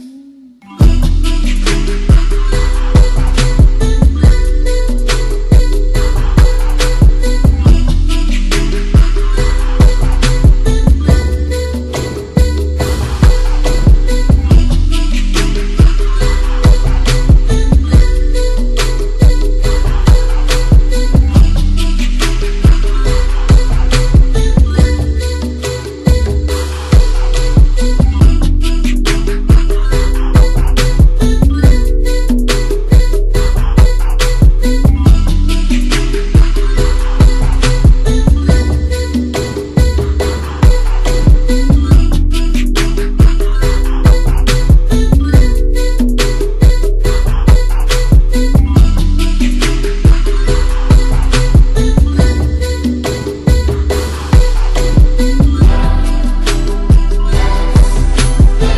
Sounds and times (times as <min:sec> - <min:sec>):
Music: 0:00.0 - 0:58.7.